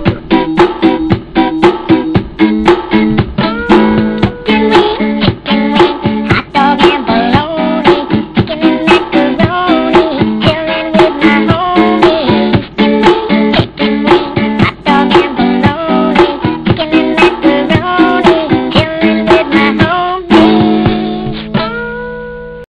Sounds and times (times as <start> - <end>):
Music: 0.0 - 22.6.